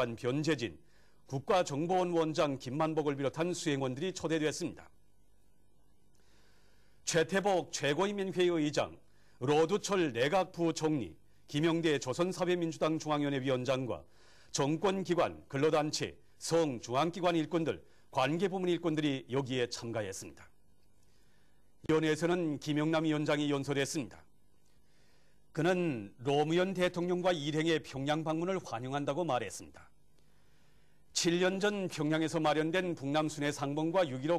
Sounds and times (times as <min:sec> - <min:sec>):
Speech: 0:00.0 - 0:05.0, 0:07.1 - 0:20.6, 0:21.9 - 0:24.3, 0:25.6 - 0:29.9, 0:31.2 - 0:34.3.